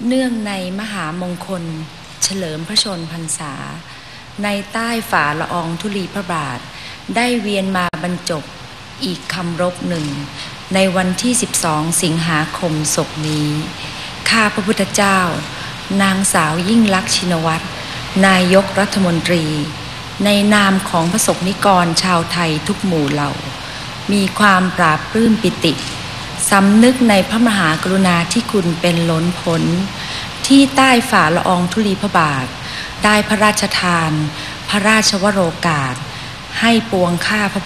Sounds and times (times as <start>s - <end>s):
Female speech, woman speaking: 0.0s - 3.8s, 4.4s - 23.5s, 24.1s - 37.6s.